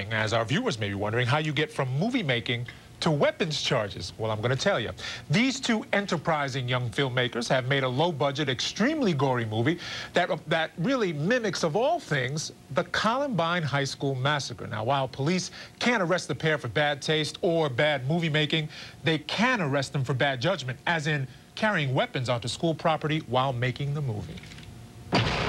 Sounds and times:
Speech: 0.0 - 24.5.

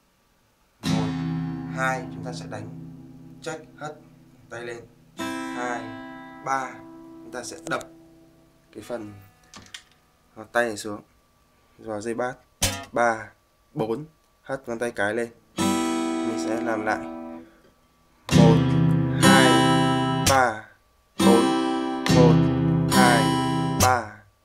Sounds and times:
Acoustic guitar: 0.8 - 8.6, 12.6 - 13.0, 15.5 - 17.6, 18.2 - 20.6, 21.2 - 24.2
Strum: 0.8 - 8.6, 18.3 - 20.5, 21.2 - 24.0
Speech: 0.9 - 2.8, 3.4 - 4.9, 5.6 - 7.9, 8.7 - 9.2, 10.4 - 11.1, 11.8 - 15.4, 16.2 - 17.1, 18.3 - 19.6, 20.3 - 21.5, 22.1 - 22.4, 23.0 - 24.3.

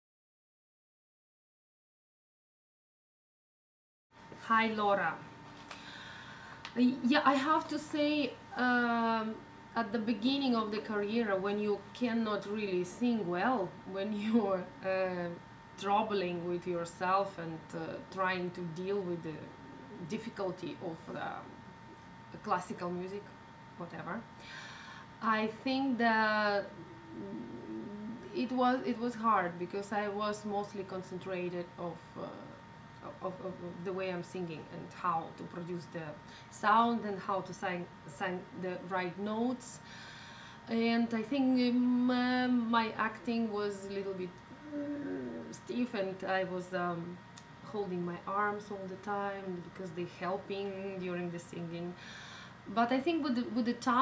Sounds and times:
Speech: 4.4 - 5.3, 6.8 - 21.6, 22.4 - 24.3, 25.2 - 39.8, 40.7 - 52.0, 52.7 - 54.0.

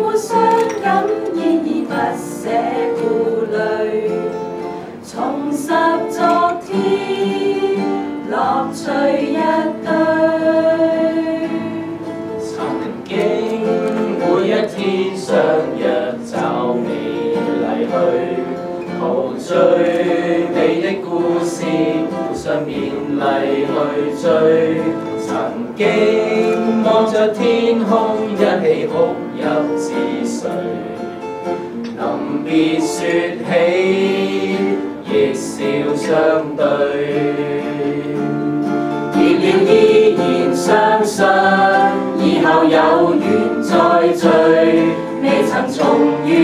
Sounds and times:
Choir: 0.0 - 46.4
Vocal music: 0.0 - 46.4.

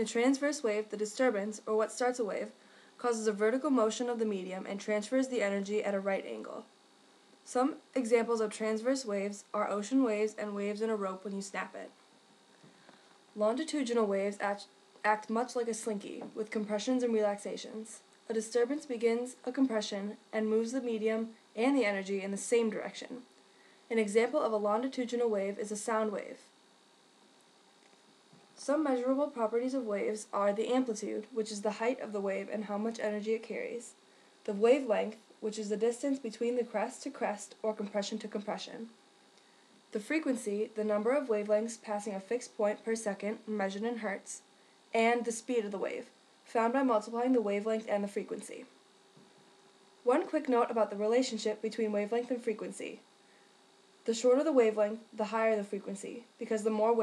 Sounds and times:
Speech: 0.0 - 6.7, 7.4 - 12.0, 13.4 - 23.3, 23.9 - 26.5, 28.6 - 39.0, 40.0 - 48.7, 50.1 - 53.0, 54.1 - 57.0.

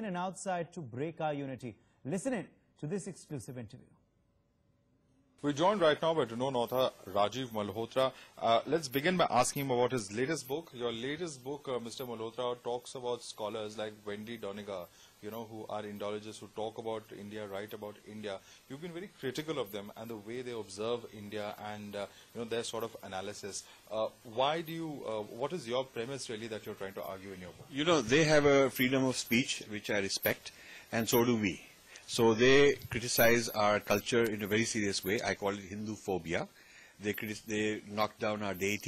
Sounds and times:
Speech: 0.0 - 3.9, 5.4 - 38.8.

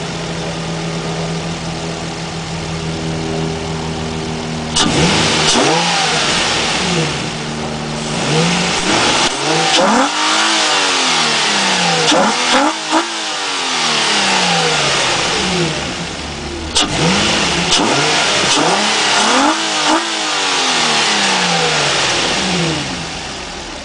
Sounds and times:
Medium engine (mid frequency): 0.0 - 23.8
Vehicle: 0.0 - 23.8
Accelerating, revving, vroom: 4.8 - 7.4, 8.0 - 16.0, 16.7 - 23.3.

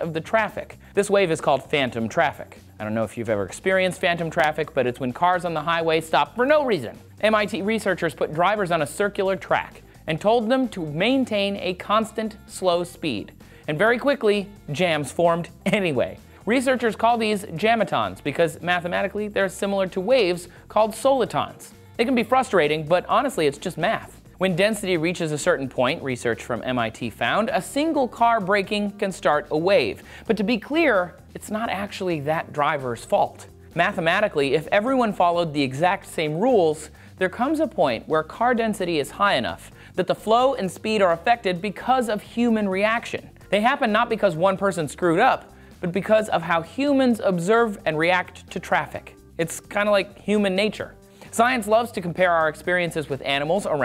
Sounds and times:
Music: 0.0 - 53.8
Speech: 0.0 - 53.8.

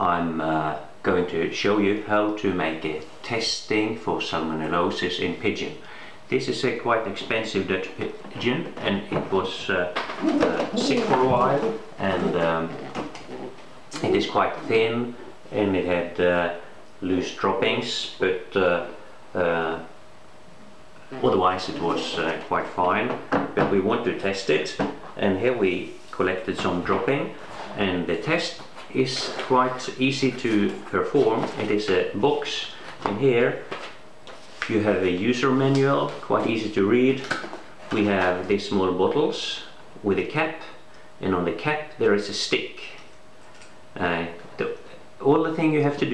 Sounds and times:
Speech: 0.0 - 19.9, 21.0 - 33.7, 34.6 - 43.1, 44.0 - 46.1
Inside, small room: 0.0 - 46.1.

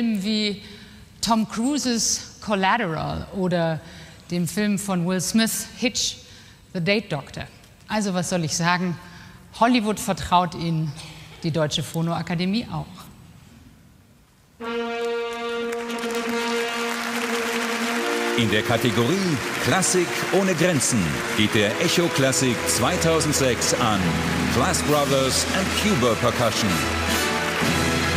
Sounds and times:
Speech: 9.6 - 13.1, 18.4 - 26.8
Music: 14.6 - 28.1.

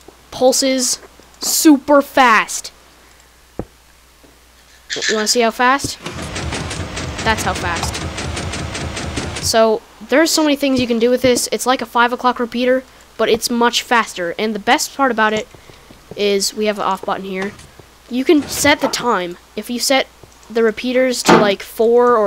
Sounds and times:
Speech: 0.4 - 2.8, 5.0 - 6.0, 7.2 - 8.0, 9.5 - 15.5, 16.2 - 22.2.

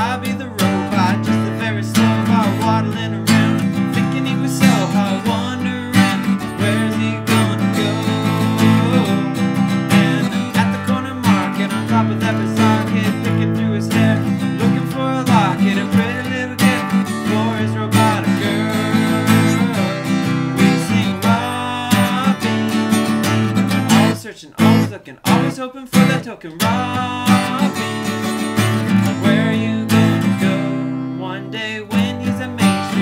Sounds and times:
Music: 0.0 - 33.0.

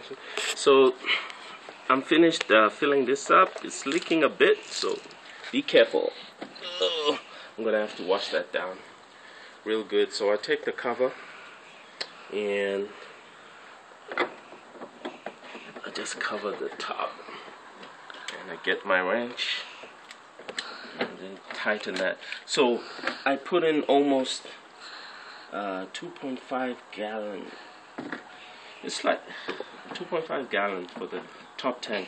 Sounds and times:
Speech: 0.0 - 1.0, 1.9 - 8.9, 9.7 - 11.2, 12.3 - 13.0, 15.8 - 17.2, 18.3 - 19.7, 21.1 - 24.5, 25.5 - 27.6, 28.8 - 29.3, 29.9 - 32.0.

